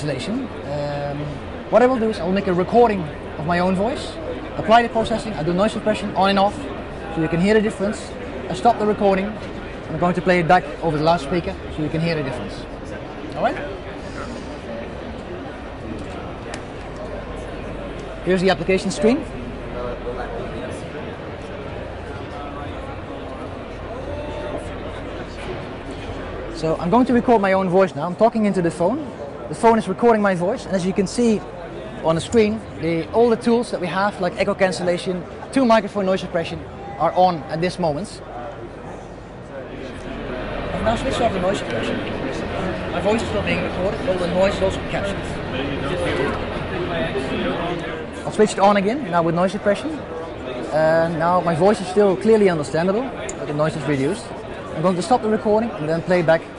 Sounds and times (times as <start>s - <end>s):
Speech: 0.0s - 14.9s, 17.0s - 38.6s, 39.4s - 56.5s.